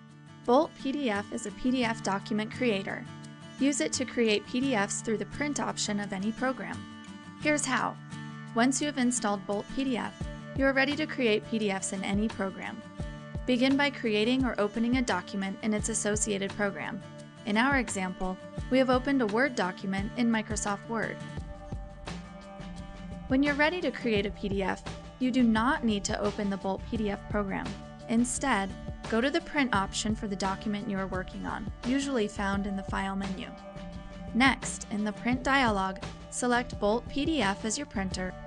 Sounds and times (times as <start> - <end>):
Music: 0.0 - 38.4
Speech: 0.5 - 6.8, 7.4 - 8.0, 8.6 - 12.8, 13.5 - 21.2, 23.3 - 33.6, 34.3 - 38.4.